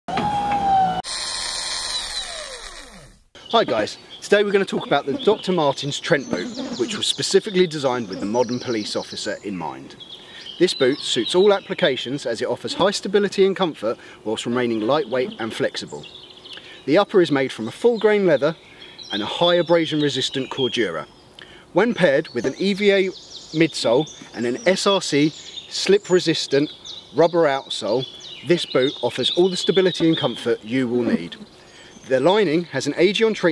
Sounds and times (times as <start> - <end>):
Drill: 0.1 - 3.3
Male speech, man speaking: 3.5 - 10.0, 10.6 - 16.0, 16.9 - 21.1, 21.8 - 31.4, 32.1 - 33.5.